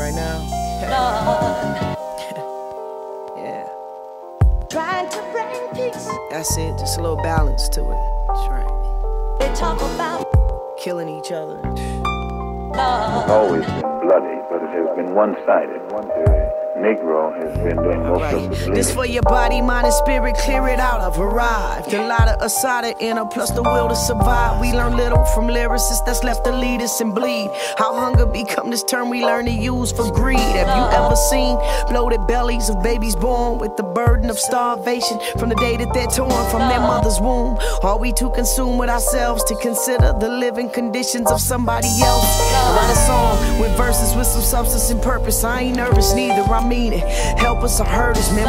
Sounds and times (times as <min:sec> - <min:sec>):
Music: 0:00.0 - 0:48.4.